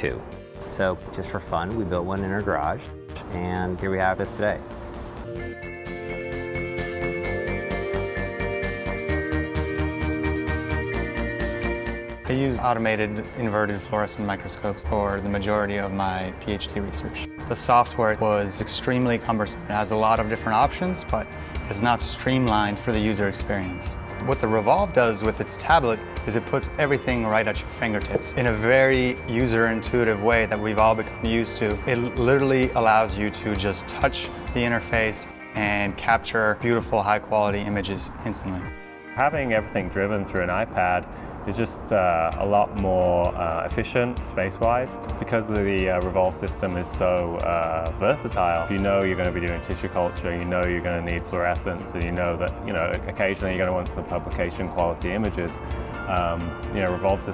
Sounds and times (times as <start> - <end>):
Speech: 0.0 - 4.6, 12.3 - 57.3
Music: 0.0 - 57.3.